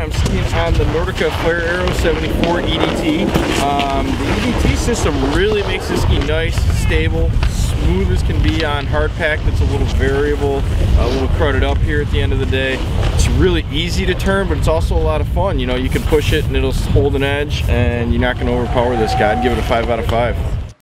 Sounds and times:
Crackle: 0.0s - 15.1s
Speech: 0.0s - 20.5s.

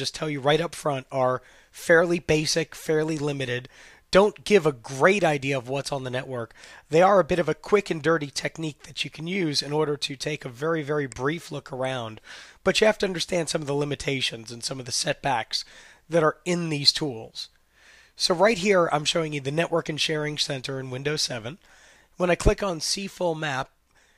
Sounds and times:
Speech: 0.0s - 17.6s, 18.2s - 21.6s, 22.2s - 23.8s.

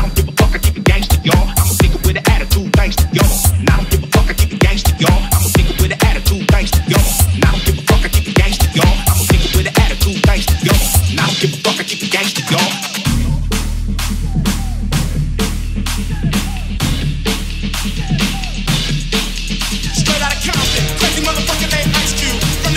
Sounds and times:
Hip hop music: 0.0s - 22.7s.

